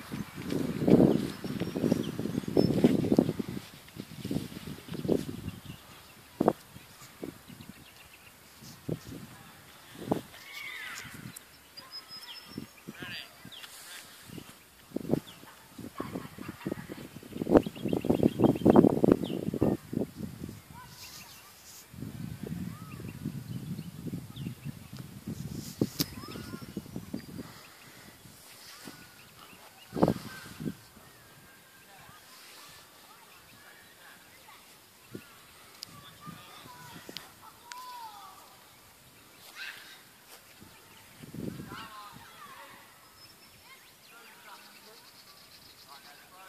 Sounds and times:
Outside, rural or natural: 0.0 - 46.4.

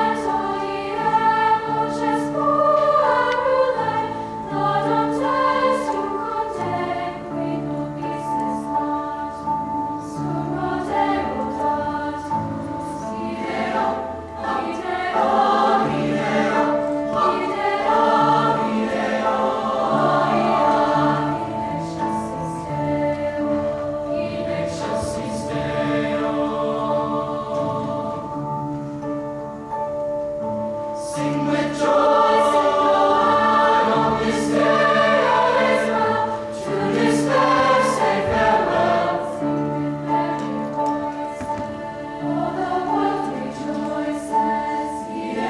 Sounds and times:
Choir: 0.0 - 29.4, 30.6 - 45.4.

